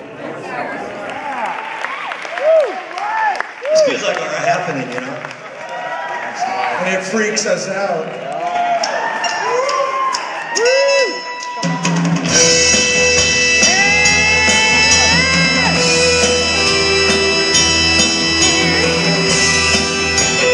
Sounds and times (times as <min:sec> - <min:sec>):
Speech: 0:03.8 - 0:05.3, 0:06.4 - 0:08.1.